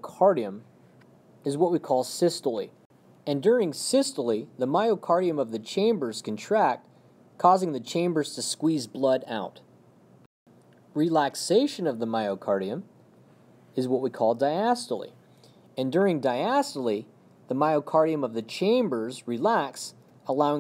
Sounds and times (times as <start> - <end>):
Speech: 0.0 - 0.7, 1.4 - 9.7, 11.0 - 12.9, 13.8 - 15.2, 15.8 - 20.6.